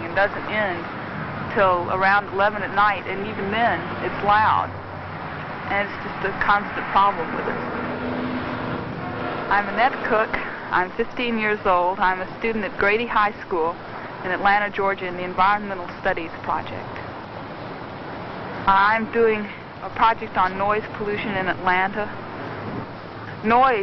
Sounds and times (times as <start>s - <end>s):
Speech: 0.0s - 0.9s, 1.5s - 4.7s, 5.7s - 7.6s, 9.5s - 17.0s, 18.7s - 22.2s, 23.3s - 23.8s.